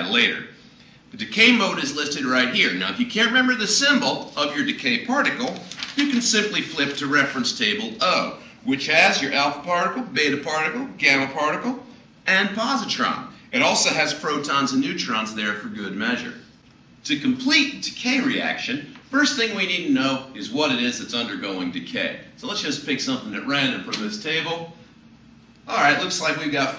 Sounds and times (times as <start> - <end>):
Speech: 0.0 - 0.5, 1.1 - 16.4, 17.0 - 24.8, 25.7 - 26.7.